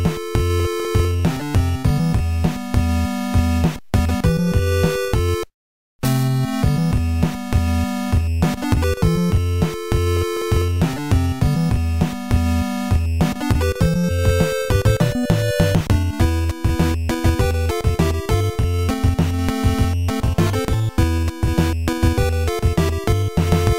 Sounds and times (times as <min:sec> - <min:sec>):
Music: 0:00.0 - 0:23.7.